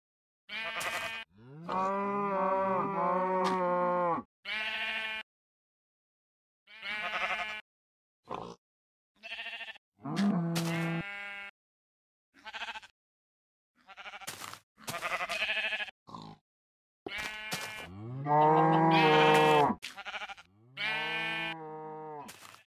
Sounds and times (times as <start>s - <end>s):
Bleat: 0.5s - 5.3s, 6.7s - 7.7s, 9.2s - 11.6s, 12.4s - 13.0s, 13.8s - 16.0s, 17.1s - 22.7s.